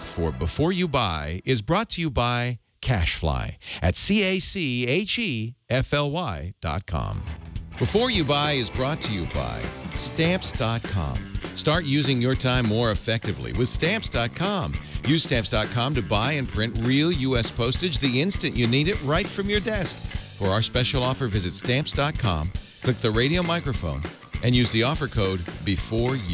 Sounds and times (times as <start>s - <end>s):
Music: 0.0s - 1.5s, 7.1s - 26.3s
Speech: 0.0s - 26.3s.